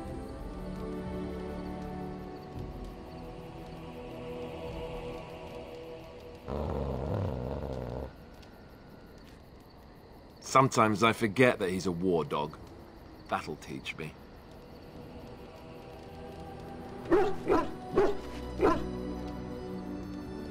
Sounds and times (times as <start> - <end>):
Music: 0.0 - 20.5
Speech: 10.4 - 12.6, 13.3 - 14.2.